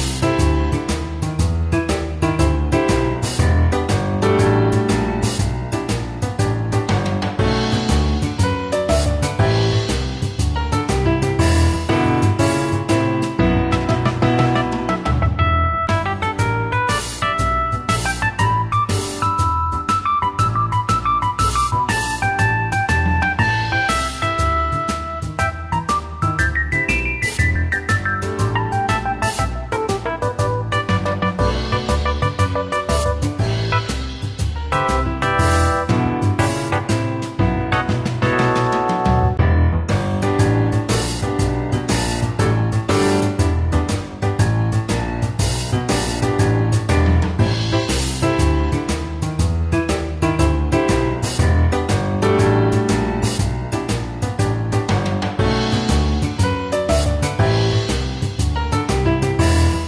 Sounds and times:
Music: 0.0 - 59.8.

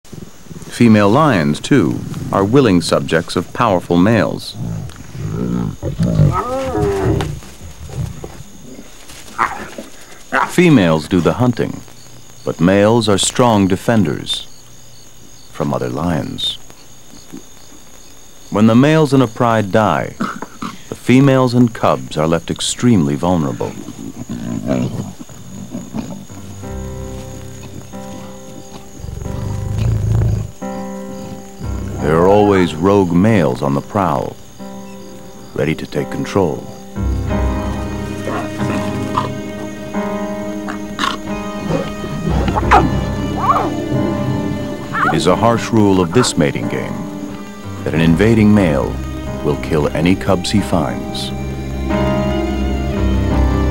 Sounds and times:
Outside, rural or natural: 0.0 - 53.7
Speech: 0.7 - 4.6, 10.4 - 11.8, 12.4 - 14.5, 15.6 - 16.6, 18.5 - 20.3, 20.9 - 23.8, 31.9 - 34.4, 35.6 - 36.7, 45.0 - 47.0, 47.8 - 51.3
Wild animals: 4.2 - 10.7, 23.2 - 32.7, 38.1 - 39.7, 40.6 - 47.0.

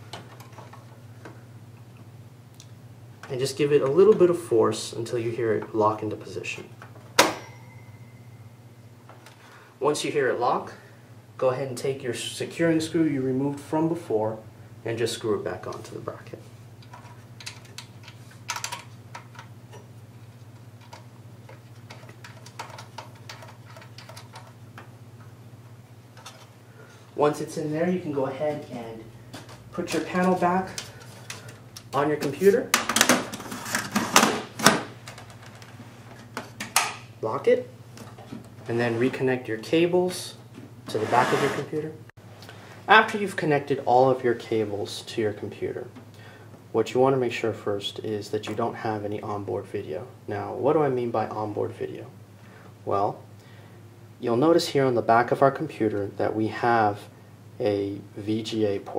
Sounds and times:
Inside, small room: 0.0 - 58.9
Speech: 3.3 - 6.8, 9.8 - 10.8, 11.4 - 16.5, 27.2 - 29.1, 29.7 - 30.8, 31.9 - 32.8, 37.2 - 37.8, 38.6 - 42.0, 42.9 - 46.0, 46.7 - 52.2, 52.8 - 53.2, 54.2 - 58.9.

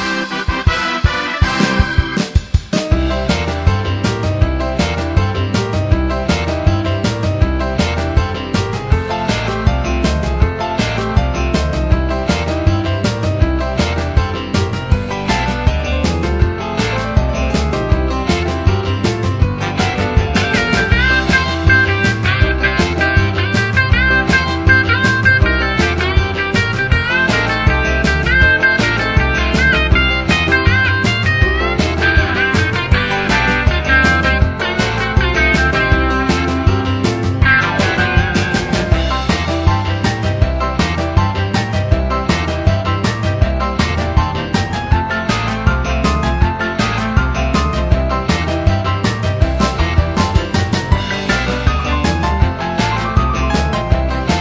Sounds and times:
Soundtrack music: 0.0 - 54.4.

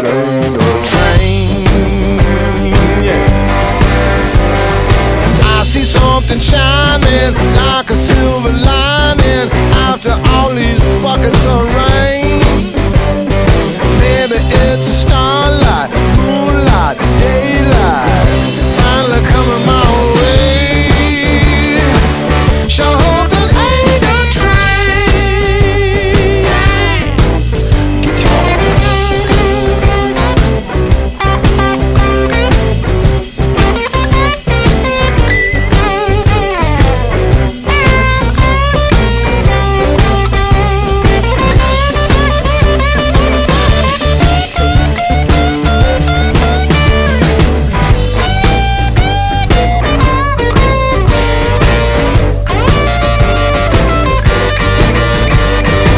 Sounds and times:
Singing: 0.0 - 3.4, 5.4 - 12.6, 14.0 - 22.1, 22.7 - 27.2
Musical instrument: 0.0 - 55.9
Rock music: 0.0 - 55.9.

